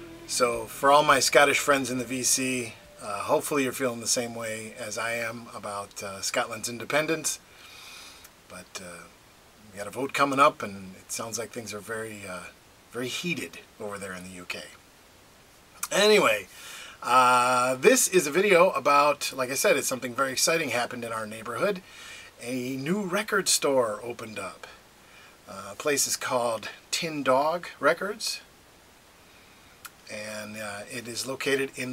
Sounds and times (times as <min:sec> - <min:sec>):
Speech: 0:00.3 - 0:07.4, 0:08.5 - 0:14.8, 0:15.8 - 0:24.8, 0:25.5 - 0:28.5, 0:30.0 - 0:31.9.